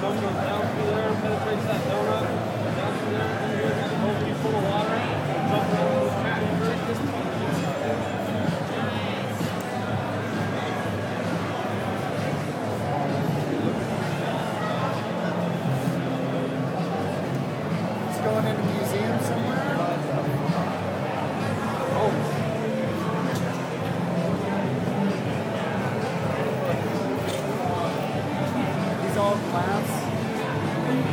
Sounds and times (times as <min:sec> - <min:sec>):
Speech: 0:00.0 - 0:31.1.